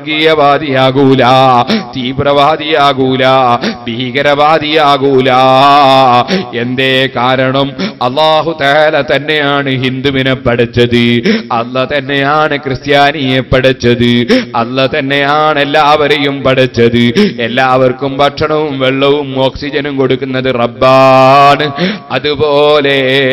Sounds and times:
Male speech, man speaking: 0.0 - 23.3
Narration, monologue: 0.0 - 23.3.

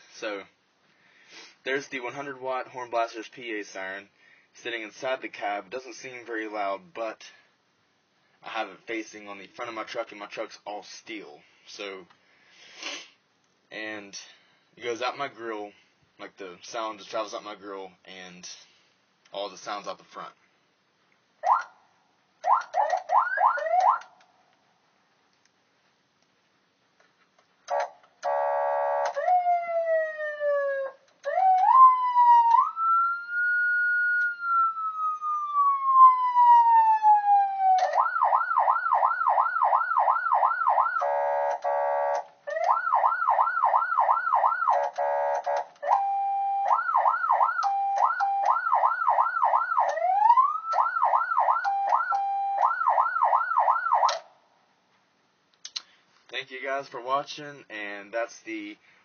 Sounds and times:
Siren: 21.4 - 21.8, 22.4 - 24.1, 27.7 - 54.2.

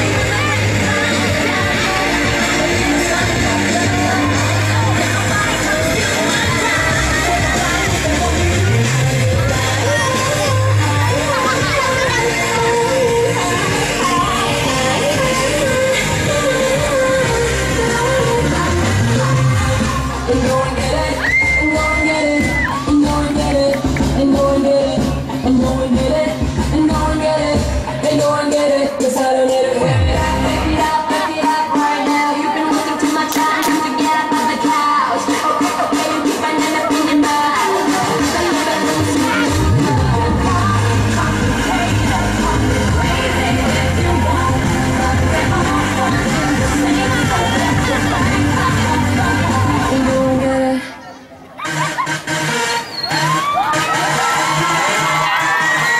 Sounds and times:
Music: 0.0 - 51.0, 51.6 - 55.9
Speech: 4.1 - 7.3, 9.5 - 15.9.

